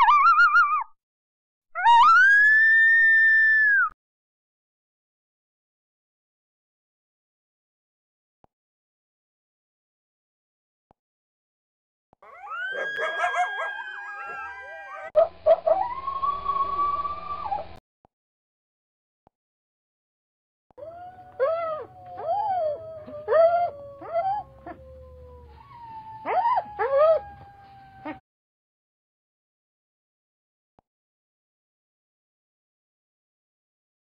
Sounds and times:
Sound effect: 0:12.3 - 0:17.8.

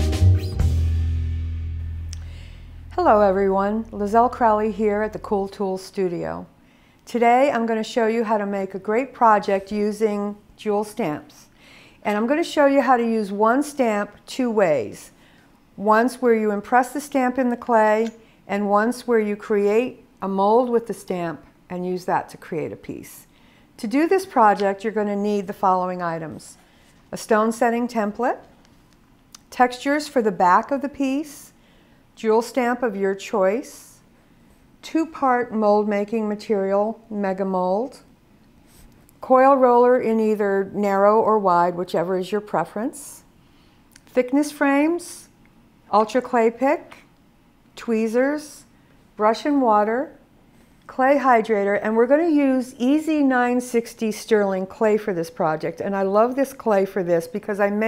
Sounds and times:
Speech: 0:03.0 - 0:06.5, 0:07.1 - 0:15.2, 0:15.8 - 0:28.5, 0:29.4 - 0:31.6, 0:32.2 - 0:34.0, 0:34.8 - 0:38.1, 0:39.2 - 0:43.3, 0:44.0 - 0:47.1, 0:47.8 - 0:50.2, 0:50.9 - 0:57.8.

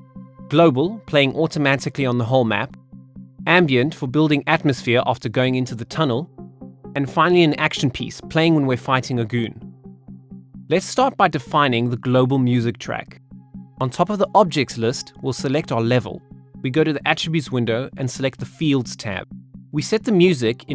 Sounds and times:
Music: 0:00.0 - 0:20.7
Speech: 0:00.5 - 0:02.8, 0:03.5 - 0:06.3, 0:07.0 - 0:09.6, 0:10.7 - 0:13.2, 0:13.8 - 0:20.7.

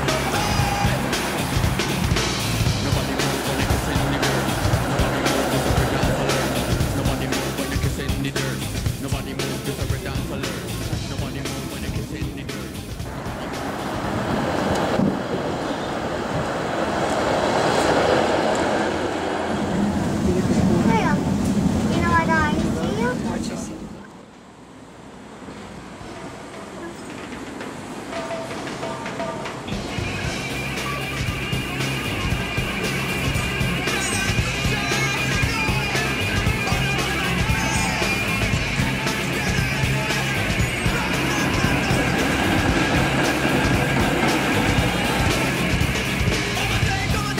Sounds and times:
Music: 0:00.0 - 0:13.9, 0:28.0 - 0:47.3.

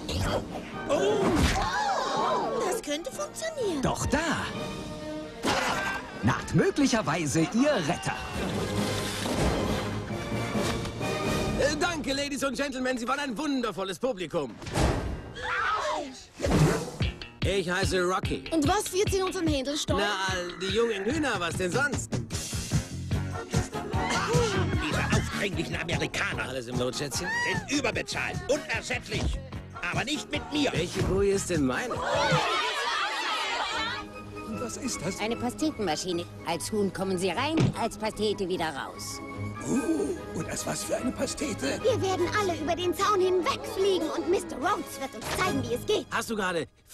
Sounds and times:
Music: 0:00.0 - 0:12.9, 0:16.4 - 0:46.6.

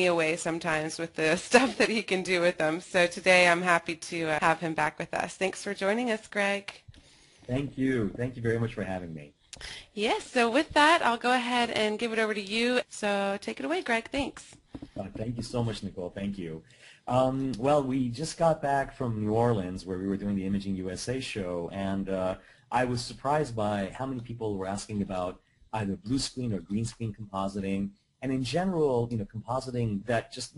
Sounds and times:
Speech: 0:00.0 - 0:06.7, 0:07.5 - 0:09.3, 0:10.0 - 0:30.5.

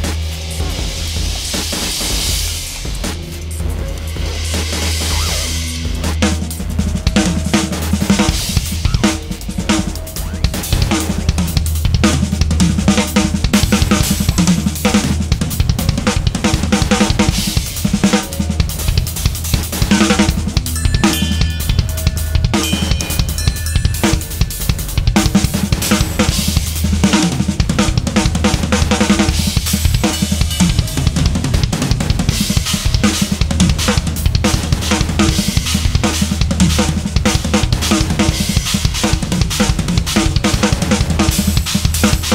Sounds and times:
Percussion: 0:00.0 - 0:42.3.

